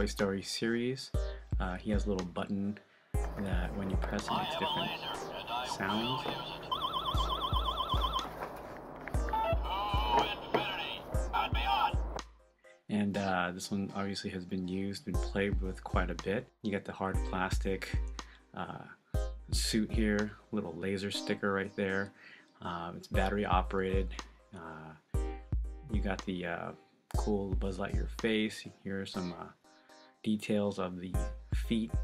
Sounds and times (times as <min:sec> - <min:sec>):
Speech: 0:00.0 - 0:02.8, 0:03.4 - 0:06.7, 0:09.6 - 0:12.0, 0:12.9 - 0:18.0, 0:18.6 - 0:25.0, 0:25.9 - 0:29.6, 0:30.3 - 0:32.0
Music: 0:00.0 - 0:32.0.